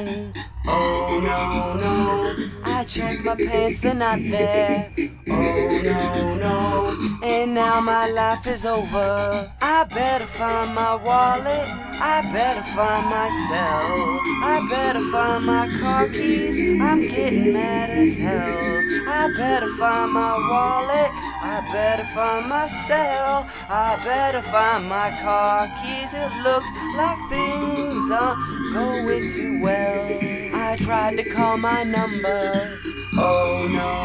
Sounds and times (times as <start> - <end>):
Music: 0.0 - 34.0.